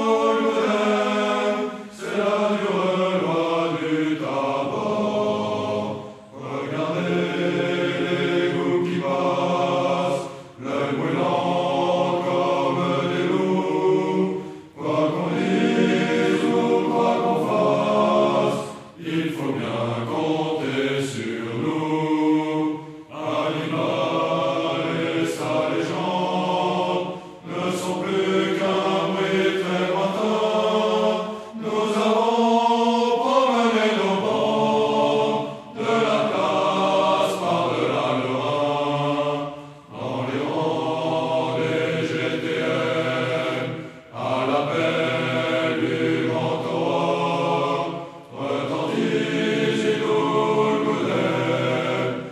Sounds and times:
Music: 0.0 - 52.3.

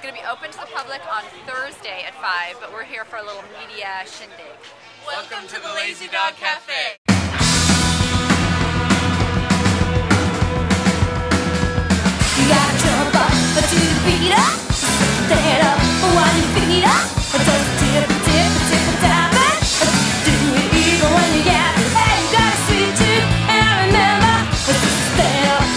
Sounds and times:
Speech: 0.0 - 7.0
Music: 7.1 - 25.7.

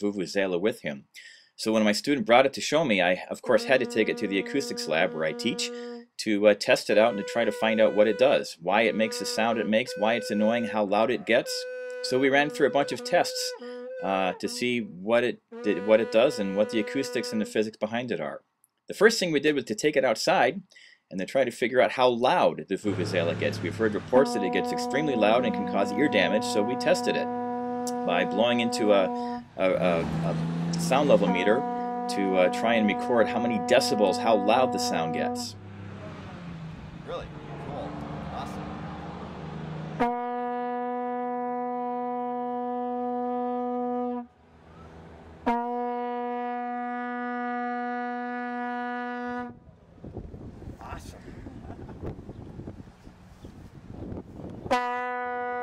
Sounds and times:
Speech: 0.0 - 27.3, 27.9 - 35.6, 37.1 - 38.6, 50.8 - 51.3.

